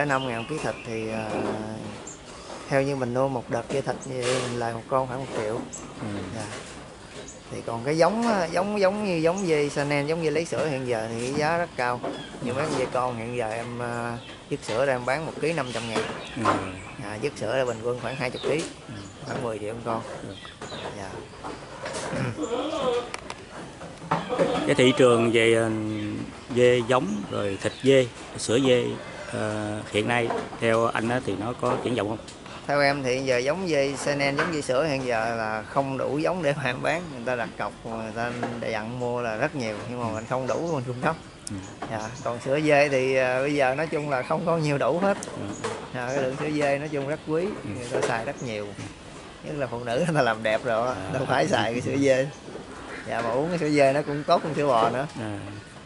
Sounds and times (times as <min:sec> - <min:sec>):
Male speech, man speaking: 0:00.0 - 0:02.0, 0:02.7 - 0:06.6, 0:07.5 - 0:21.2, 0:24.4 - 0:48.9, 0:49.5 - 0:52.4, 0:53.1 - 0:55.7
Animal: 0:17.6 - 0:27.9.